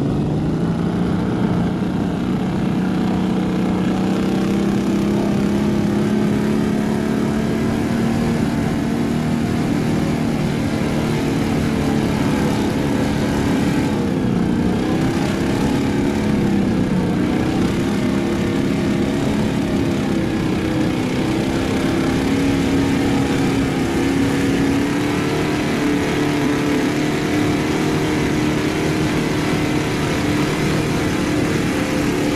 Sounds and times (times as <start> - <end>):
Motorboat, speedboat: 0.0 - 32.3.